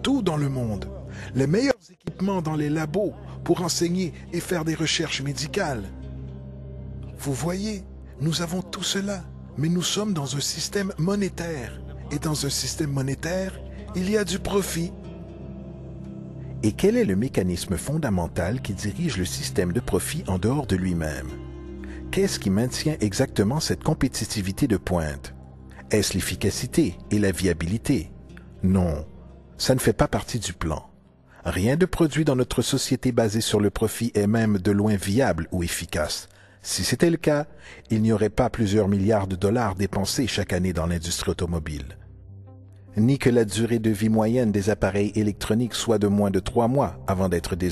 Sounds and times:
Narration, monologue: 0:00.0 - 0:47.7.

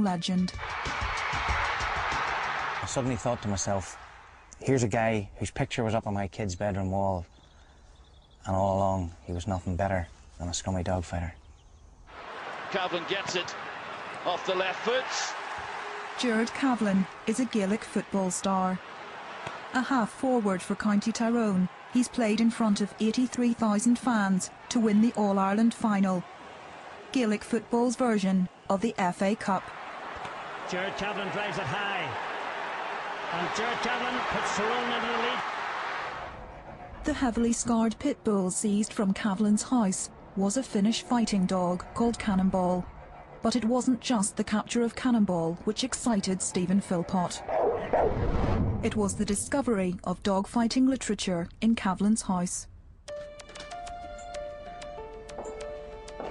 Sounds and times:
Speech: 0:30.7 - 0:32.2, 0:33.3 - 0:35.4, 0:43.5 - 0:47.4, 0:48.9 - 0:52.7.

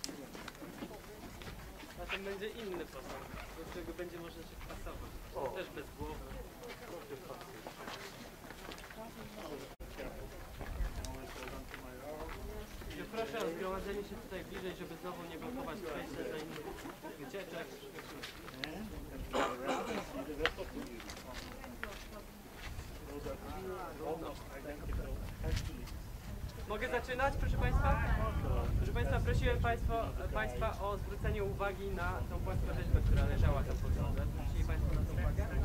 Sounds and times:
Speech: 0:00.0 - 0:35.6.

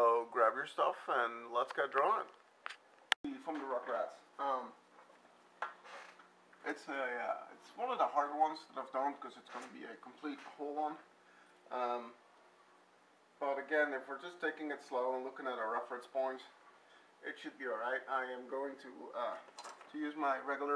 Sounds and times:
Speech: 0:00.0 - 0:02.4, 0:03.2 - 0:04.8, 0:06.6 - 0:11.1, 0:11.7 - 0:12.2, 0:13.4 - 0:16.6, 0:17.2 - 0:20.7.

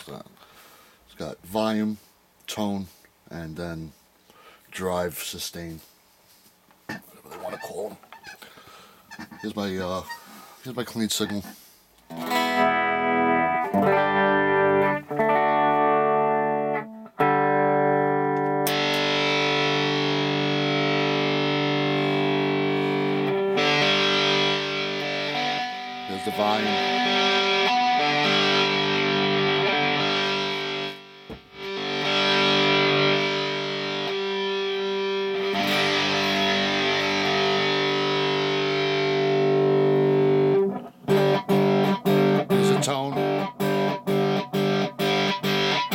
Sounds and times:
Speech: 0:00.0 - 0:00.3, 0:01.1 - 0:04.0, 0:04.7 - 0:05.9, 0:07.1 - 0:08.0, 0:09.4 - 0:11.6, 0:26.1 - 0:26.8, 0:42.5 - 0:43.3
Guitar: 0:00.0 - 0:45.9.

